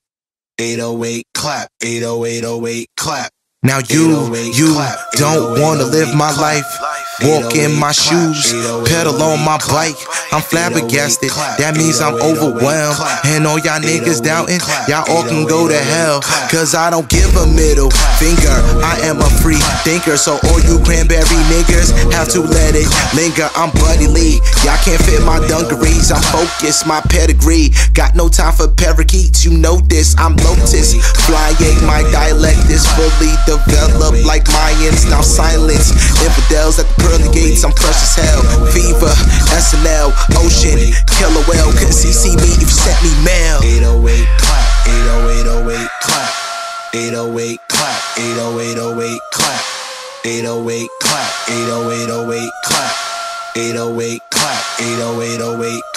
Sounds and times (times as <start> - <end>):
Pop music: 3.7 - 55.9.